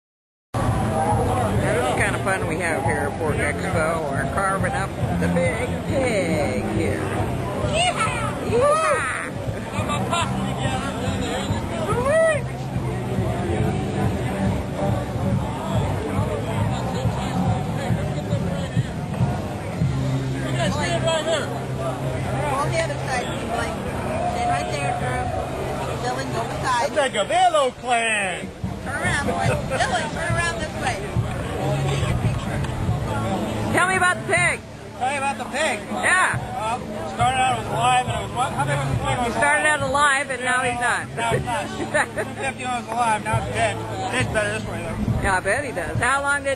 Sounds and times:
Outside, urban or manmade: 0:00.5 - 0:46.5
Hubbub, speech noise, speech babble: 0:00.6 - 0:46.5
Music: 0:00.6 - 0:46.5.

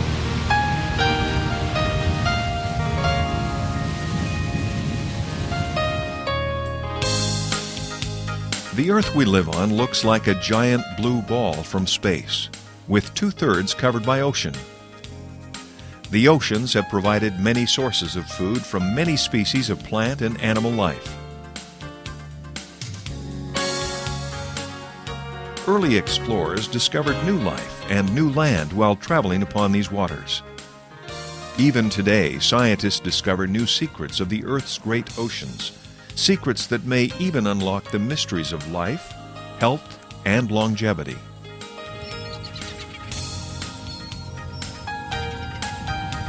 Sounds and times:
Music: 0:00.0 - 0:46.2
Speech: 0:08.8 - 0:14.7, 0:16.1 - 0:21.1, 0:25.7 - 0:30.4, 0:31.6 - 0:41.2.

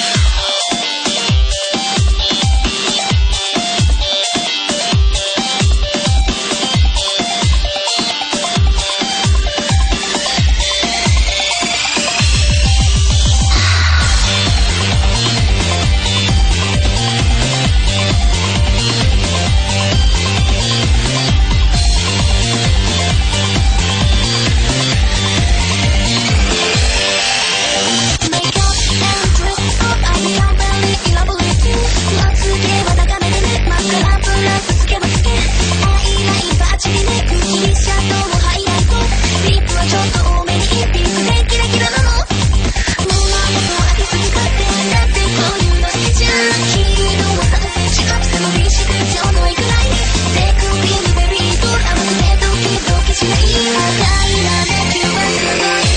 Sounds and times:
Music: 0:00.0 - 0:55.9.

